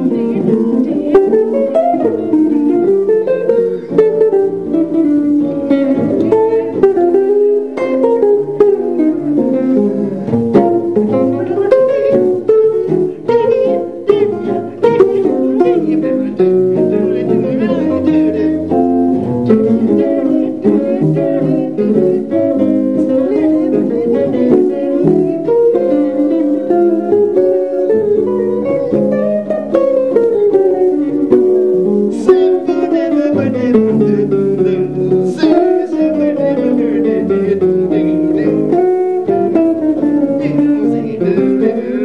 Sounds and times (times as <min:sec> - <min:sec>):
Guitar: 0:00.0 - 0:42.0
Ukulele: 0:00.0 - 0:42.0.